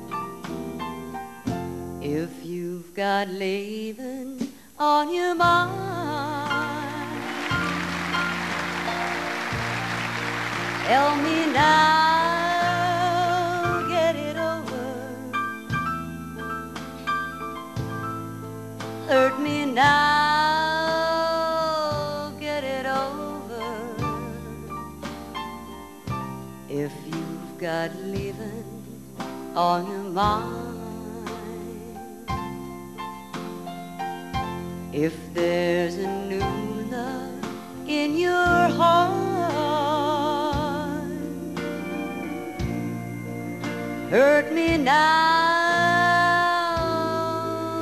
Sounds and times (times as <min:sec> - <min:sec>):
Music: 0:00.0 - 0:47.8
Female singing: 0:02.0 - 0:07.6, 0:10.8 - 0:15.4, 0:19.1 - 0:24.9, 0:26.7 - 0:29.0, 0:29.6 - 0:32.1, 0:35.0 - 0:42.9, 0:44.1 - 0:47.8.